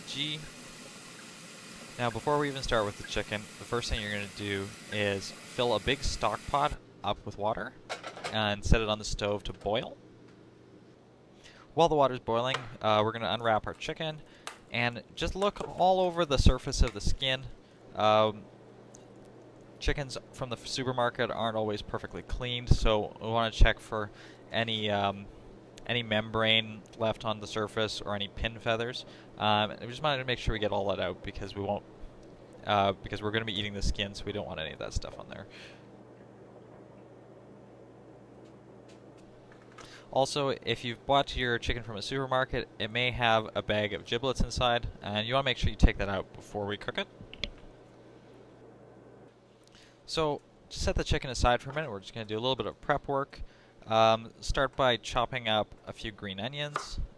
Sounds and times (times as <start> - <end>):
Speech: 0.0 - 0.5, 2.0 - 10.0, 11.8 - 18.4, 19.8 - 31.8, 32.6 - 35.6, 40.1 - 47.1, 50.1 - 57.1.